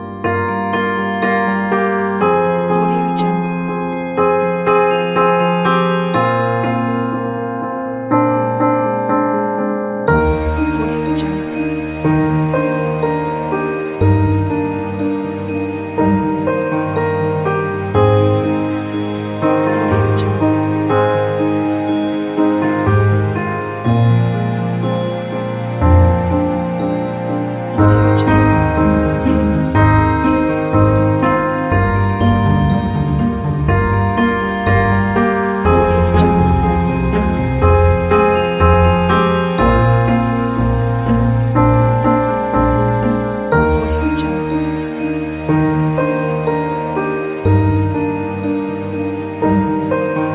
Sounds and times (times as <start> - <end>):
Wedding music: 10.1 - 16.6, 17.4 - 40.9, 43.5 - 49.9.